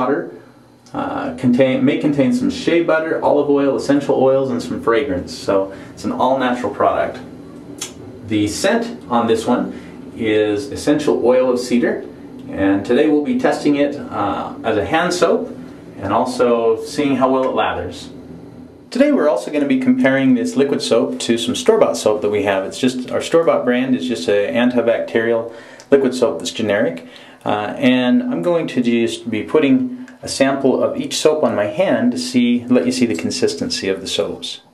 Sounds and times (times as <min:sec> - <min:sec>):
Speech: 0:00.0 - 0:18.2, 0:18.9 - 0:34.7.